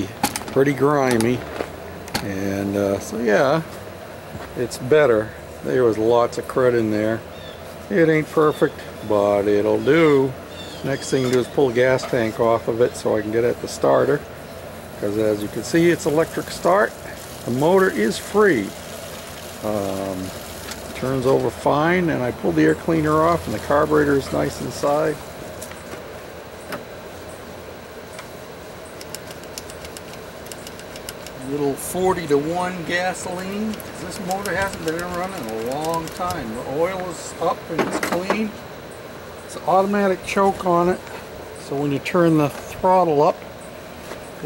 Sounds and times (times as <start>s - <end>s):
Speech: 0.0s - 1.5s, 2.2s - 3.7s, 4.4s - 7.3s, 7.9s - 14.3s, 15.0s - 18.8s, 19.6s - 25.2s, 31.4s - 38.6s, 39.5s - 43.4s.